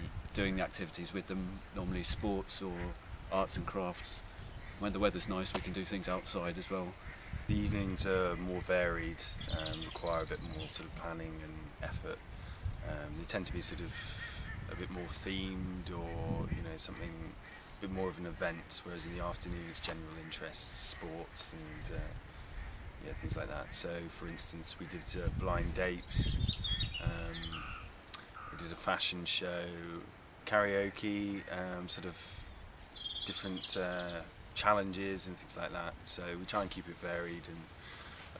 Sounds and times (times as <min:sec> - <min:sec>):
Speech: 0:00.0 - 0:04.2, 0:04.8 - 0:12.2, 0:12.8 - 0:22.2, 0:23.0 - 0:26.4, 0:27.0 - 0:27.6, 0:28.2 - 0:32.4, 0:33.3 - 0:37.7.